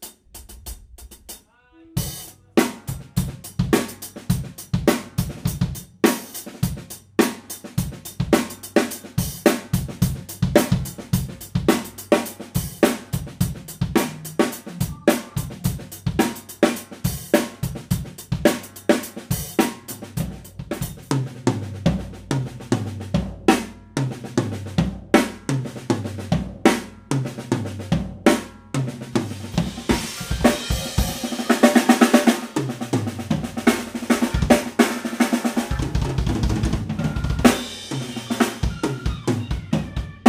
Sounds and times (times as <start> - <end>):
Music: 0.0 - 40.2.